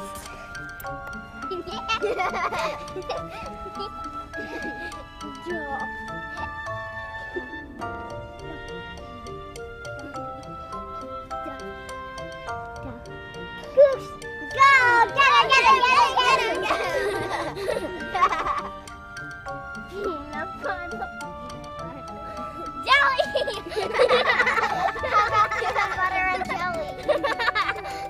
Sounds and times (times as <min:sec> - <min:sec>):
Music: 0:00.0 - 0:28.0.